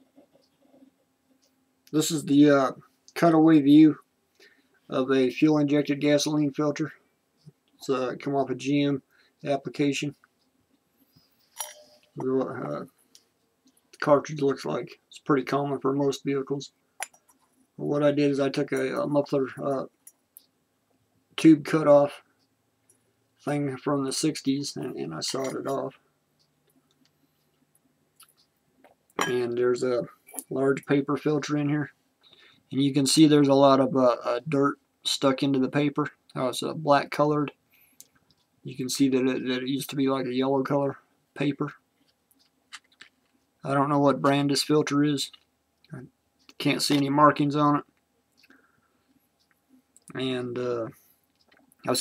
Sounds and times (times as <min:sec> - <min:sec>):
Speech: 0:01.9 - 0:04.1, 0:04.9 - 0:07.0, 0:07.8 - 0:10.2, 0:12.2 - 0:12.9, 0:14.0 - 0:16.8, 0:17.8 - 0:19.9, 0:21.4 - 0:22.2, 0:23.4 - 0:26.0, 0:29.2 - 0:32.0, 0:32.7 - 0:37.6, 0:38.6 - 0:41.8, 0:43.6 - 0:47.9, 0:50.1 - 0:51.0.